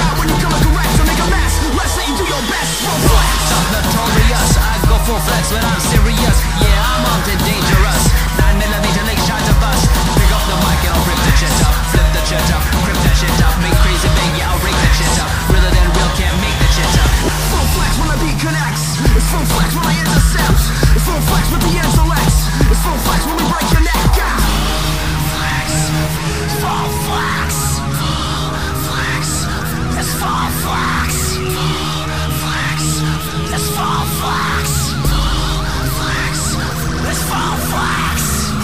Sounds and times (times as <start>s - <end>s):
Music: 0.0s - 38.6s.